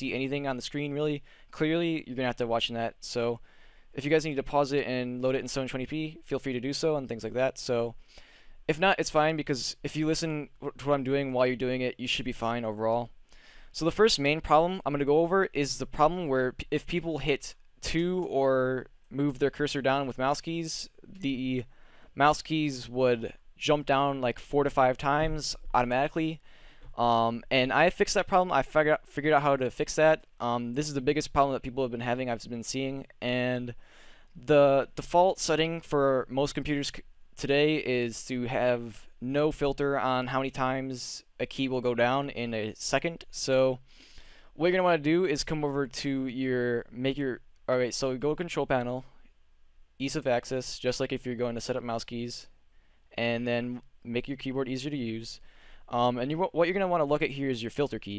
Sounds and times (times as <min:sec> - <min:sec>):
Speech: 0:00.0 - 0:03.4, 0:04.0 - 0:08.0, 0:08.7 - 0:26.4, 0:27.0 - 0:33.8, 0:34.4 - 0:43.8, 0:44.6 - 0:49.2, 0:50.0 - 0:52.5, 0:53.2 - 0:58.1.